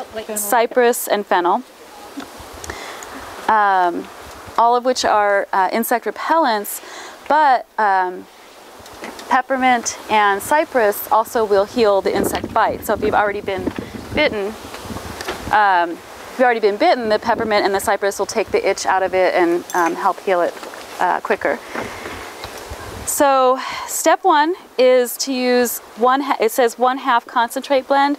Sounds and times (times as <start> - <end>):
Speech: 0.0 - 2.2, 3.5 - 8.3, 9.3 - 14.6, 15.5 - 21.6, 23.1 - 28.1.